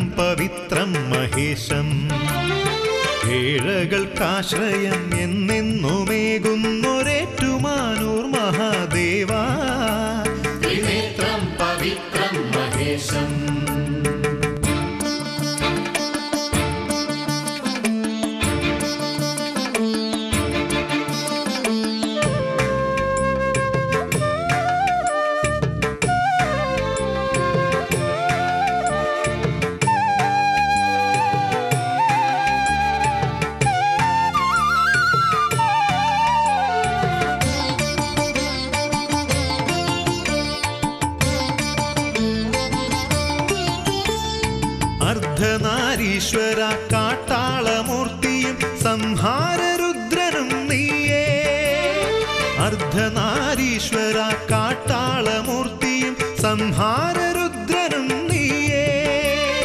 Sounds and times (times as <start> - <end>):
Tabla: 0.0 - 59.6.